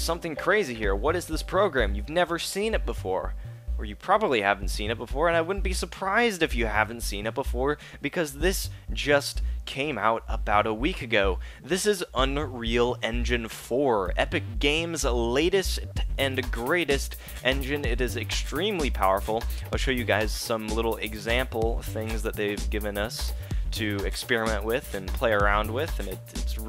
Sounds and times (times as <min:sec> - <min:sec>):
Music: 0:00.0 - 0:26.6
Speech: 0:00.0 - 0:26.6.